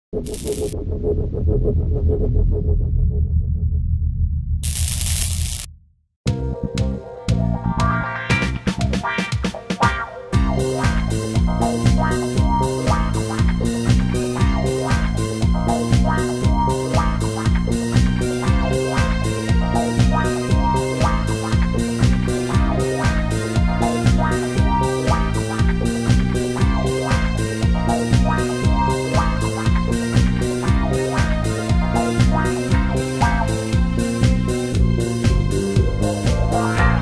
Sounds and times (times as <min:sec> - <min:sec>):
Music: 0:06.2 - 0:37.0.